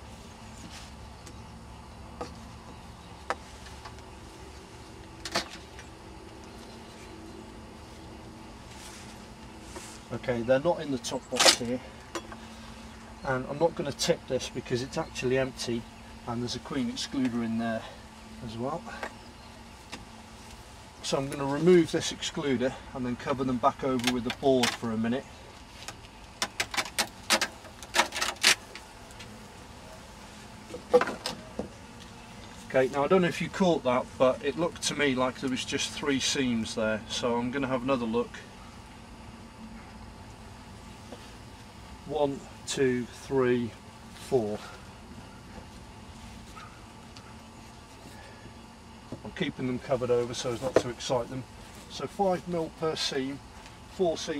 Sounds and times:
Bee, wasp, etc.: 0.0 - 54.3
Fly, housefly: 0.0 - 54.3.

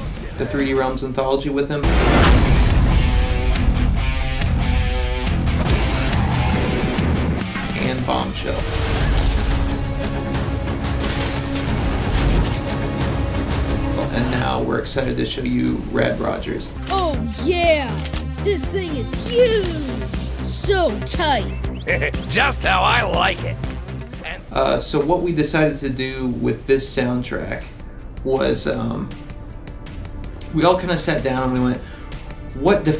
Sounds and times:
Speech: 0.2 - 1.8, 7.7 - 8.7, 20.5 - 23.6, 32.6 - 32.9.

